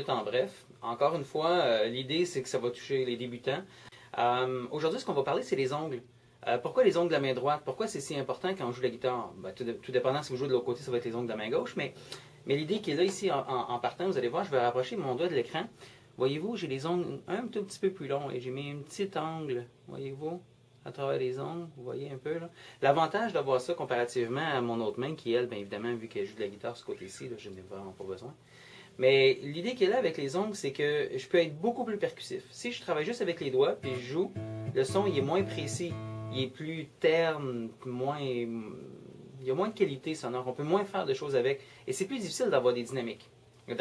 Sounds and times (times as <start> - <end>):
Speech: 0.0 - 28.4, 29.0 - 43.8.